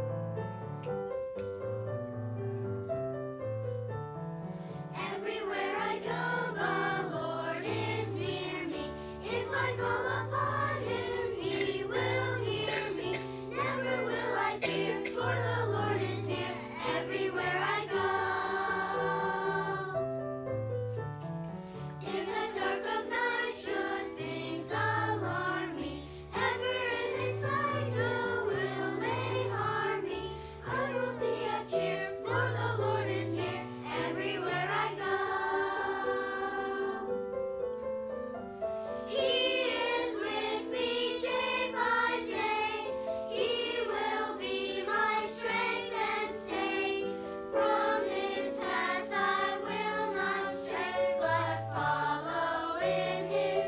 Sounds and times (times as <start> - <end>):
Piano: 0.0 - 53.6
Choir: 4.9 - 20.2, 22.0 - 37.3, 39.0 - 53.6.